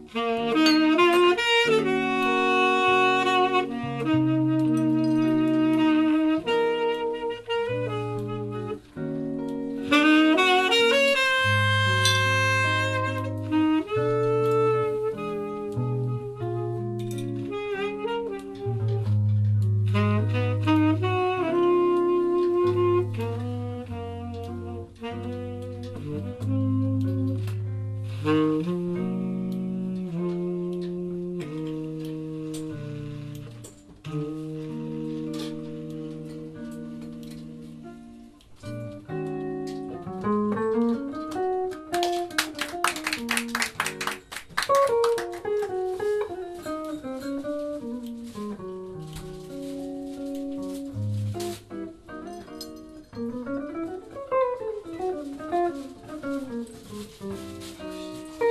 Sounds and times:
Brass instrument: 0.0 - 58.5
Saxophone: 0.0 - 58.5.

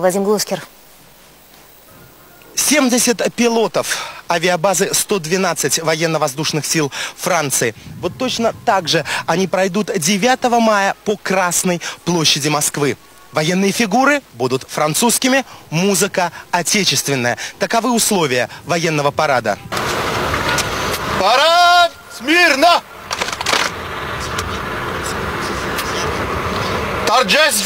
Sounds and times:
Speech: 0.0 - 0.7, 2.6 - 19.7, 21.2 - 22.8, 27.1 - 27.6.

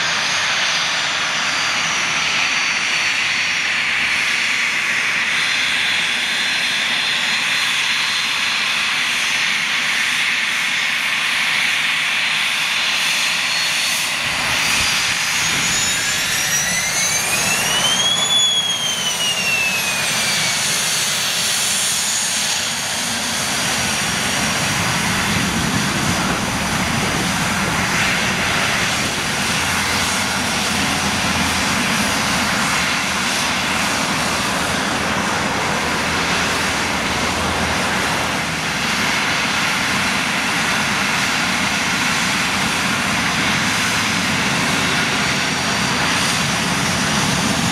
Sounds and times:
Aircraft engine: 0.0 - 47.7
Fixed-wing aircraft, airplane: 0.0 - 47.7
Outside, rural or natural: 0.0 - 47.7.

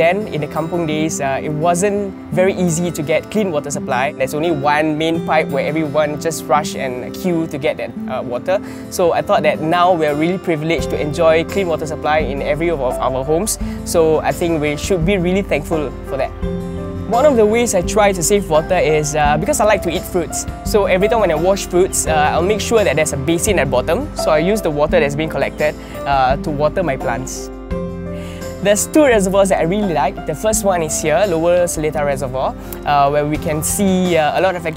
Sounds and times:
Speech: 0.0 - 16.3, 17.1 - 27.5, 28.6 - 34.7
Music: 0.0 - 34.7.

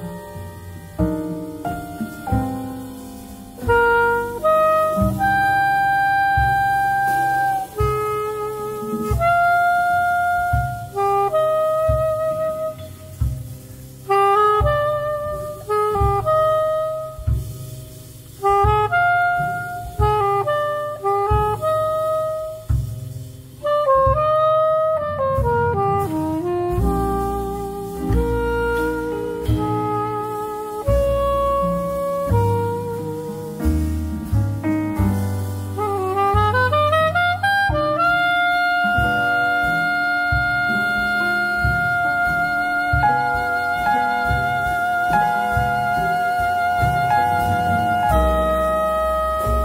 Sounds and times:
Wind instrument, woodwind instrument: 0.0 - 49.6.

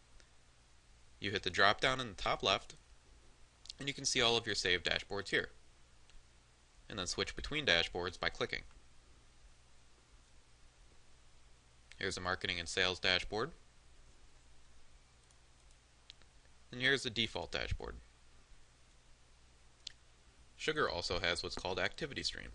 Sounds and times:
Speech: 1.2 - 2.8, 3.7 - 5.6, 6.9 - 8.7, 11.9 - 13.6, 16.7 - 18.0, 20.6 - 22.5.

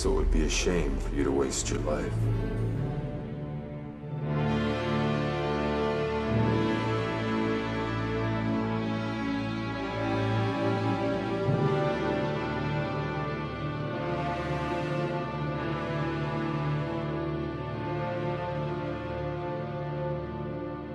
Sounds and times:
Music: 0.0 - 20.9.

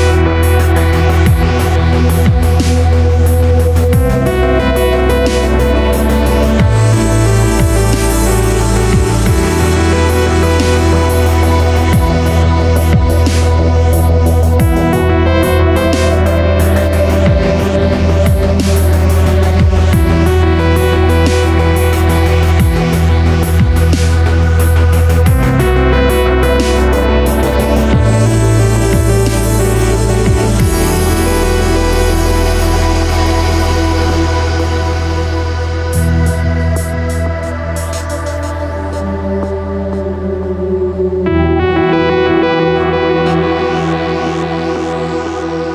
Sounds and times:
Ambient music: 0.0 - 45.7
Electronica: 0.0 - 45.7.

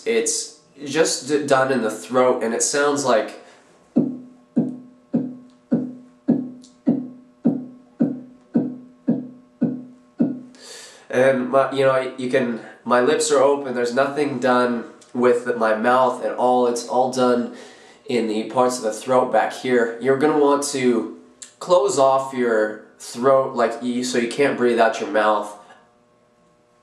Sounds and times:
Speech: 0.0 - 8.7, 11.1 - 25.7.

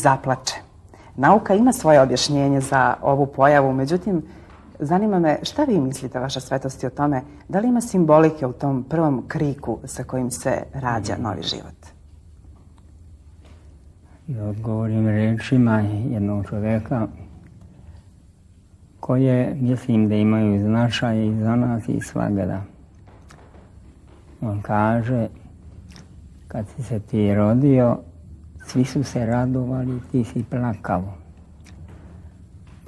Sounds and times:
Speech: 0.0 - 12.0, 19.0 - 22.8, 26.5 - 31.2
Inside, small room: 0.0 - 32.8.

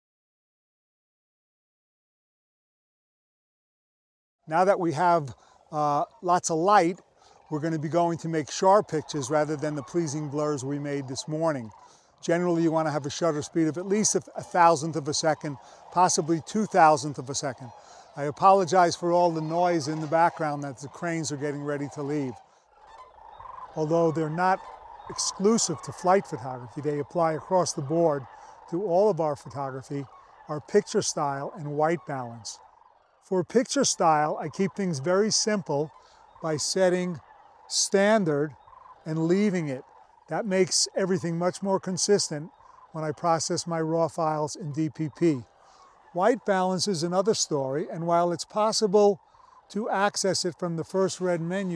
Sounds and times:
Speech: 4.5 - 22.4, 23.8 - 32.6, 33.3 - 38.5, 39.1 - 45.4, 46.2 - 51.7.

